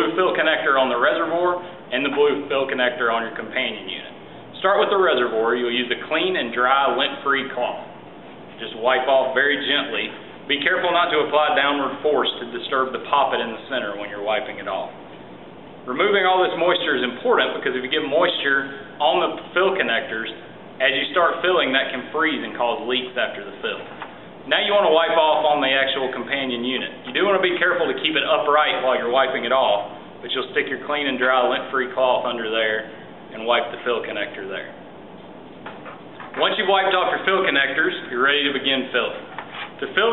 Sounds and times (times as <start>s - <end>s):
Speech: 0.0s - 8.0s, 8.6s - 15.0s, 15.9s - 23.9s, 24.5s - 34.8s, 36.4s - 40.1s.